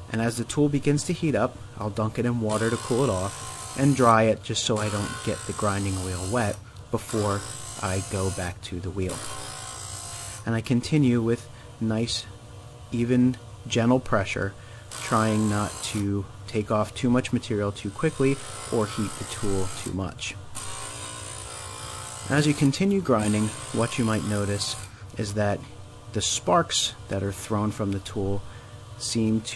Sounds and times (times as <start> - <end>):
Speech: 0.1 - 9.2, 10.5 - 12.3, 13.0 - 20.4, 22.3 - 28.4, 29.0 - 29.5.